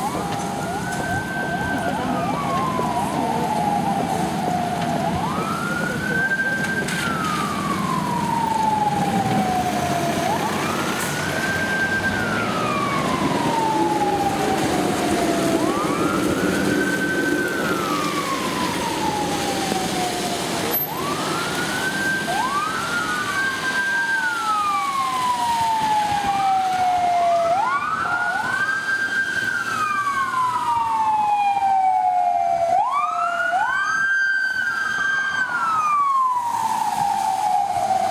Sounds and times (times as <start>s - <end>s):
Police car (siren): 0.0s - 38.1s.